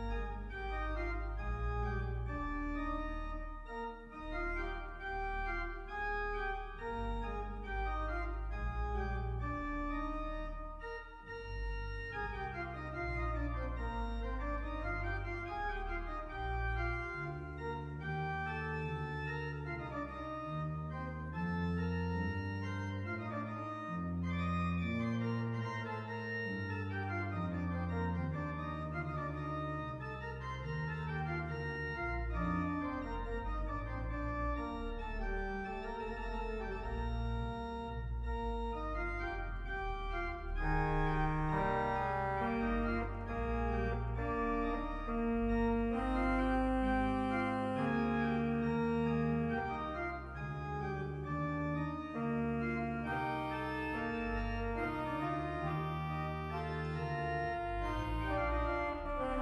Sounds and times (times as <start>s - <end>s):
Hammond organ: 0.0s - 59.4s.